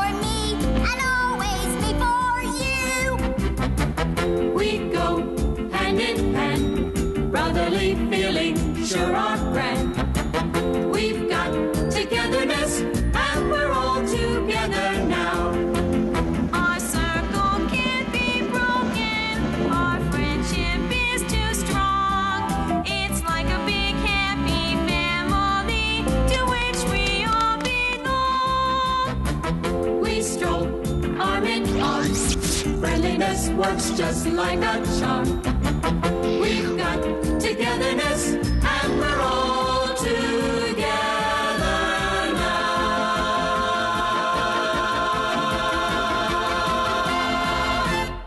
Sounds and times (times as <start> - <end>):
Music: 0.0 - 48.2.